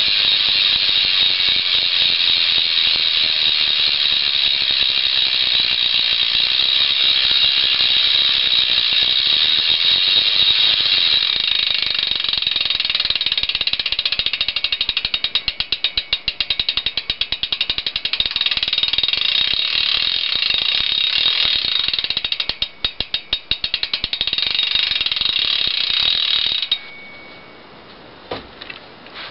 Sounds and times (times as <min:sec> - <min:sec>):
Gears: 0:00.0 - 0:26.9
Ratchet, pawl: 0:00.0 - 0:27.1.